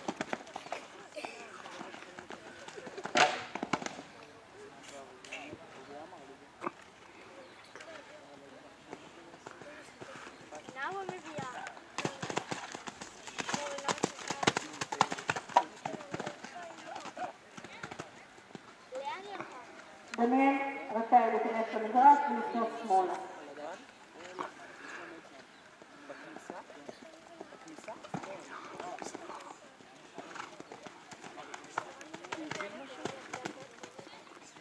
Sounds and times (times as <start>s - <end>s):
Horse: 0.0s - 5.7s, 8.8s - 34.6s
Outside, urban or manmade: 0.0s - 34.6s.